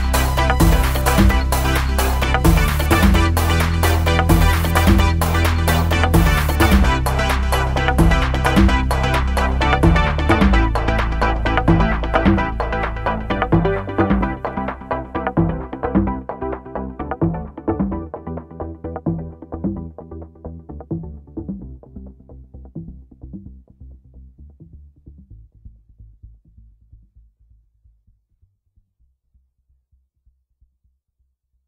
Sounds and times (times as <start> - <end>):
Music: 0.0 - 27.8.